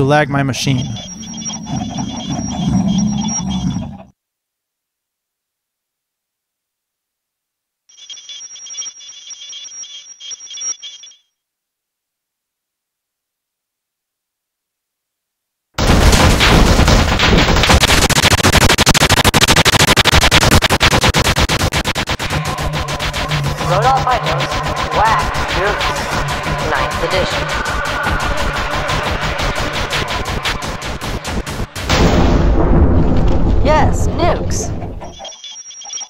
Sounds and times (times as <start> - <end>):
Speech: 0.0 - 1.0, 23.6 - 24.3, 33.6 - 34.7
Music: 22.3 - 31.9.